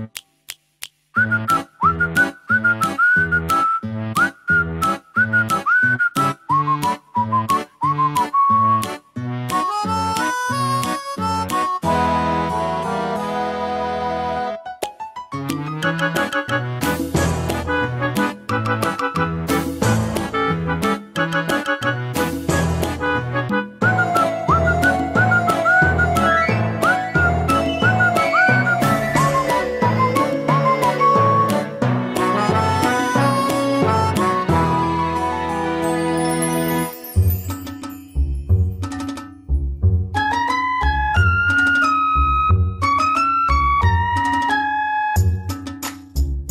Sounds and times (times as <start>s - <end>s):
Video game music: 7.6s - 39.2s.